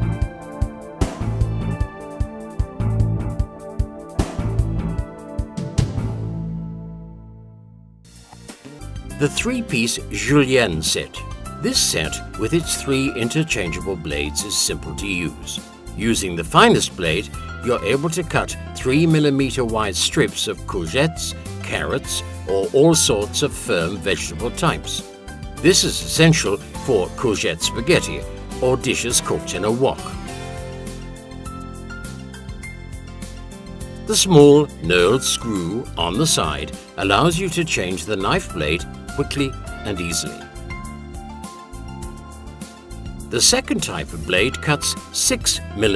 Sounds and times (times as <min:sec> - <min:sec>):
Music: 0:00.0 - 0:45.9
Speech: 0:09.2 - 0:25.0, 0:25.7 - 0:30.2, 0:34.1 - 0:40.4, 0:43.3 - 0:45.9.